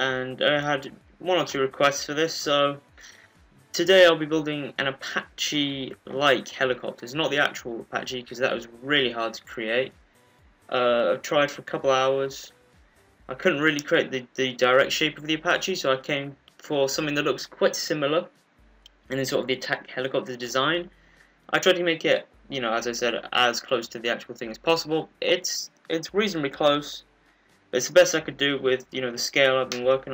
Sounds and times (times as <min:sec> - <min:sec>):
Speech: 0:00.0 - 0:02.9, 0:03.8 - 0:09.9, 0:10.7 - 0:12.5, 0:13.3 - 0:18.3, 0:19.1 - 0:20.9, 0:21.5 - 0:27.0, 0:27.8 - 0:30.1.